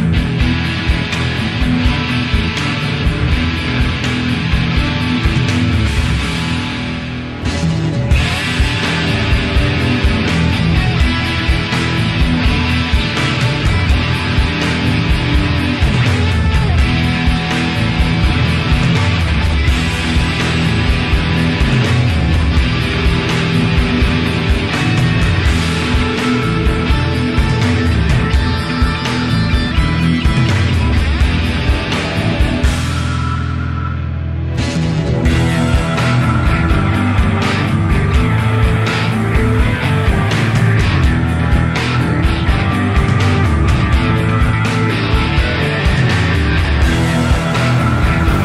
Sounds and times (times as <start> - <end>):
Music: 0.0 - 48.4.